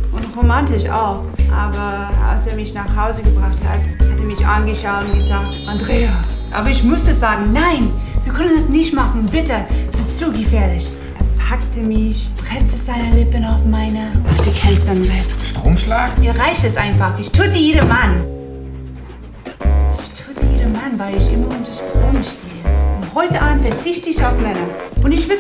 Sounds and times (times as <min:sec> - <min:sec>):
Music: 0:00.0 - 0:25.4
Speech: 0:00.2 - 0:18.3, 0:20.0 - 0:22.4, 0:23.1 - 0:25.4.